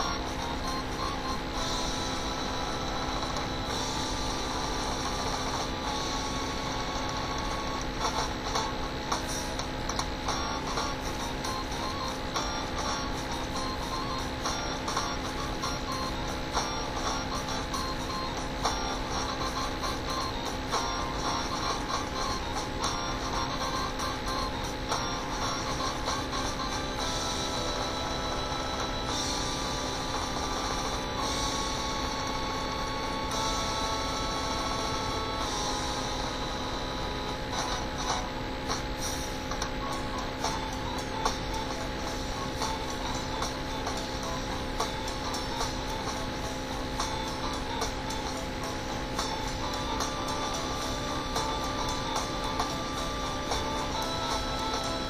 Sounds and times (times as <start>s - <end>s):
Music: 0.0s - 55.1s.